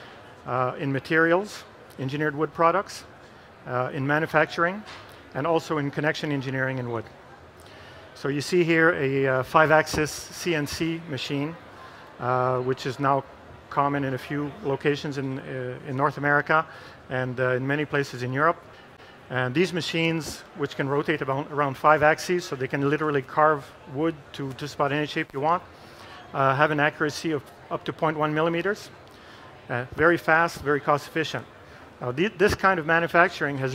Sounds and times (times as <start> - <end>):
Speech: 0.4 - 7.5, 8.2 - 18.6, 19.3 - 33.7.